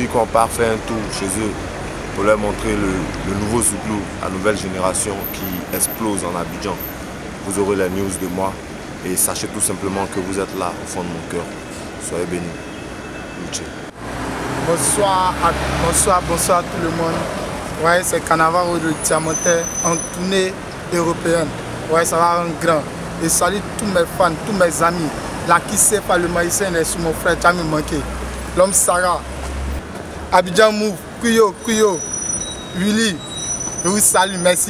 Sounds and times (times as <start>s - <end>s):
Speech: 0.0s - 1.6s, 2.2s - 12.6s, 13.4s - 13.7s, 14.7s - 17.2s, 17.8s - 29.2s, 30.3s - 32.0s, 32.8s - 33.2s, 33.8s - 34.7s.